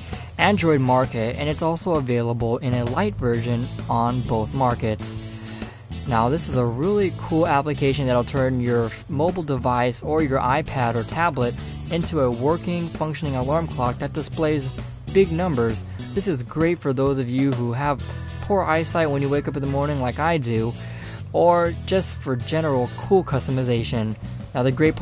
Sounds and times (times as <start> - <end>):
Music: 0.0 - 25.0
Speech: 0.4 - 5.2, 6.1 - 25.0.